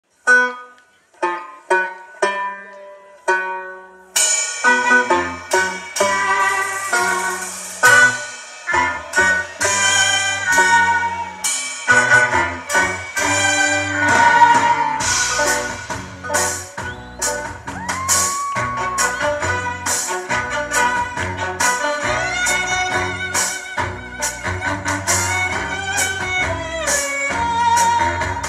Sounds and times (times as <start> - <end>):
Banjo: 0.2 - 28.4.